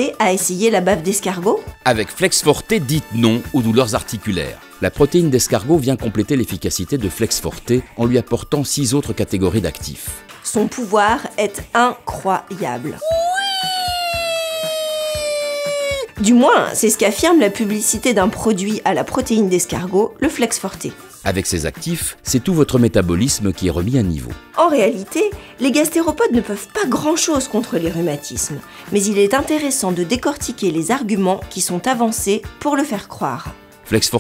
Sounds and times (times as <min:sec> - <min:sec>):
Speech: 0:00.0 - 0:13.0, 0:16.2 - 0:34.2
Music: 0:00.0 - 0:34.2.